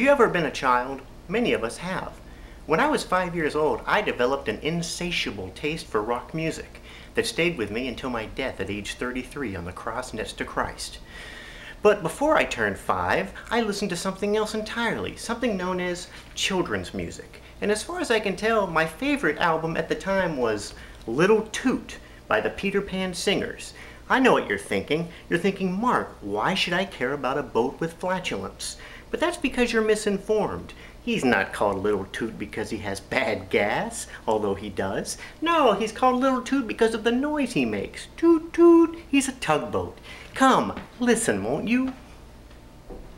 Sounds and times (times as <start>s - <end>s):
Speech: 0.0s - 11.1s, 11.8s - 42.0s.